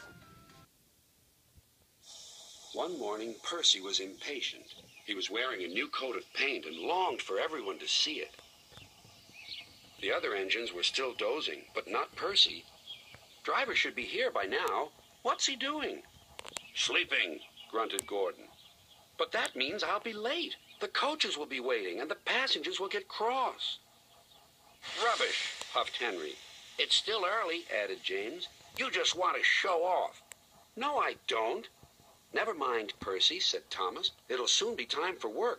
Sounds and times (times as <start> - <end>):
Speech: 2.8 - 8.4, 10.0 - 12.7, 13.4 - 16.1, 16.8 - 18.5, 19.2 - 23.8, 24.9 - 30.2, 30.8 - 35.5.